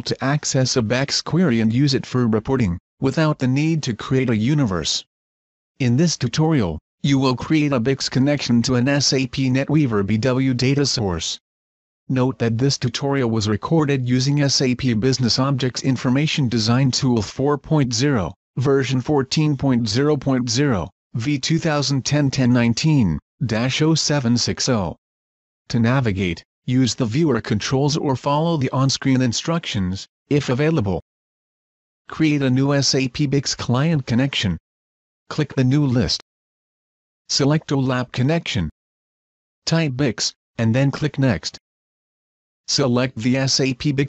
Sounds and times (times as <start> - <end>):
Speech: 0.0 - 5.1, 5.8 - 11.4, 12.1 - 25.0, 25.7 - 31.1, 32.1 - 34.6, 35.3 - 36.2, 37.3 - 38.8, 39.7 - 41.6, 42.7 - 44.0.